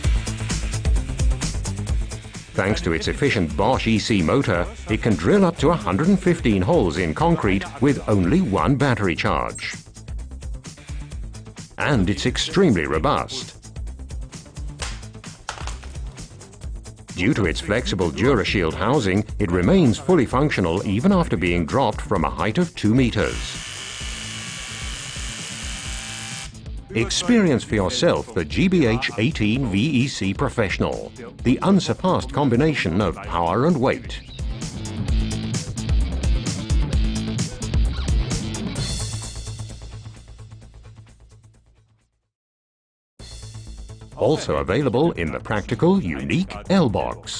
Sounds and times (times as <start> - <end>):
Music: 0.0 - 42.3, 43.2 - 47.3
Speech: 2.6 - 9.8, 11.8 - 13.6, 17.2 - 23.6, 26.9 - 34.2, 44.2 - 47.3
Drill: 23.2 - 26.6.